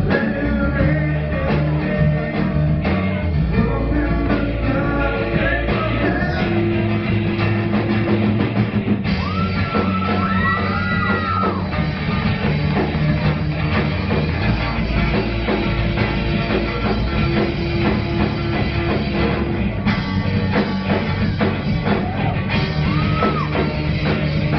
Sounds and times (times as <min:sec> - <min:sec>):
Music: 0:00.0 - 0:24.5.